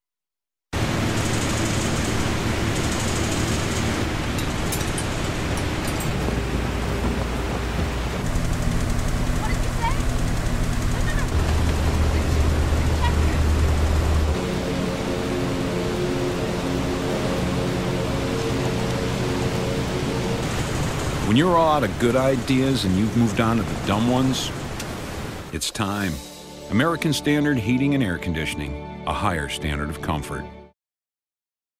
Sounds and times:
Music: 0:10.8 - 0:21.8, 0:25.6 - 0:30.8
Speech: 0:21.3 - 0:24.6, 0:25.5 - 0:30.5.

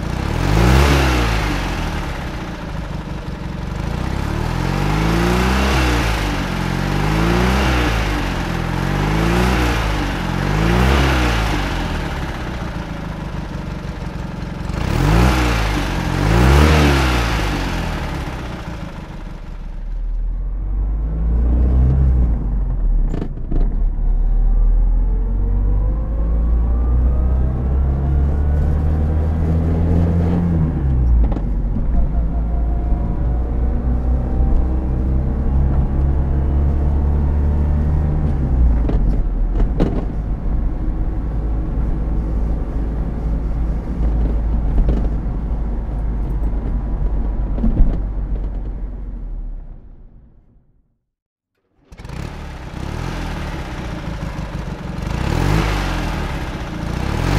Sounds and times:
Accelerating, revving, vroom: 0:00.0 - 0:02.3, 0:03.9 - 0:12.4, 0:14.7 - 0:18.6, 0:20.8 - 0:22.5, 0:23.1 - 0:31.4, 0:32.4 - 0:39.2, 0:51.9 - 0:57.3
Car: 0:00.0 - 0:51.0, 0:51.6 - 0:57.3.

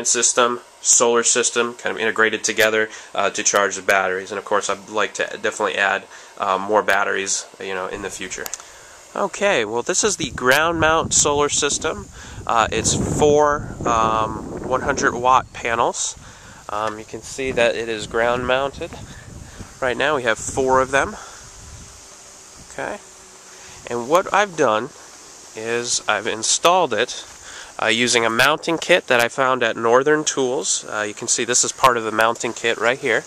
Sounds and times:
Wind noise (microphone): 0:10.2 - 0:22.0.

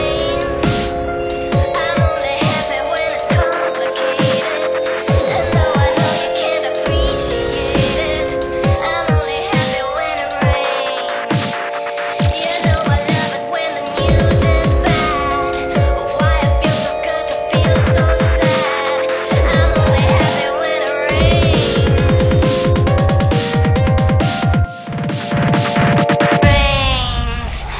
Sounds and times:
Dubstep: 0:00.0 - 0:27.7.

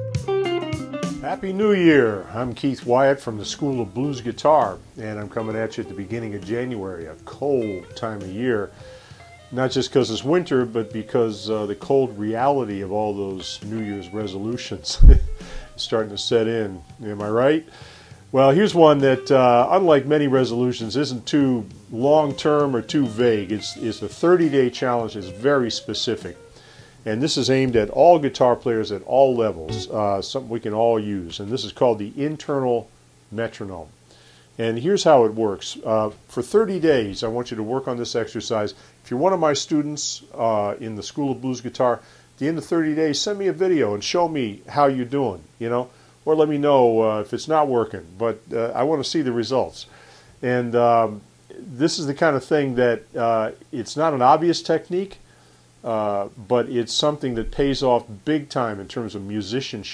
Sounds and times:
Speech: 0:01.2 - 0:08.8, 0:09.5 - 0:17.7, 0:18.3 - 0:26.4, 0:27.1 - 0:33.9, 0:34.6 - 0:55.2, 0:55.8 - 0:59.9.

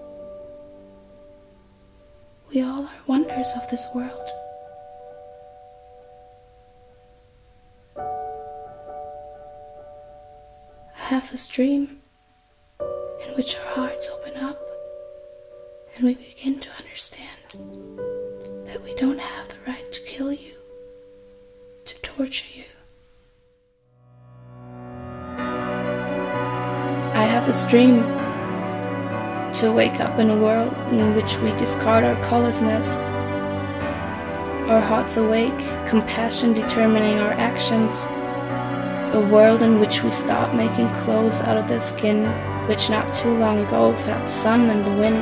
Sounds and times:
Music: 0:00.0 - 0:45.2
Speech: 0:02.5 - 0:04.4, 0:11.0 - 0:12.0, 0:13.2 - 0:14.6, 0:16.0 - 0:17.6, 0:18.7 - 0:20.6, 0:21.9 - 0:22.8, 0:27.2 - 0:28.1, 0:29.5 - 0:33.1, 0:34.7 - 0:38.1, 0:39.1 - 0:45.2.

